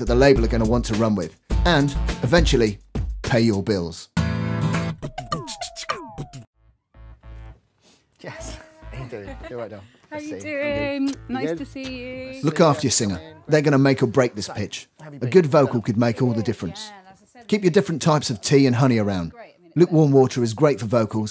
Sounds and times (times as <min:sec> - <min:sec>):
Speech: 0:00.0 - 0:04.1, 0:08.2 - 0:21.3
Music: 0:00.0 - 0:07.6, 0:08.3 - 0:13.4.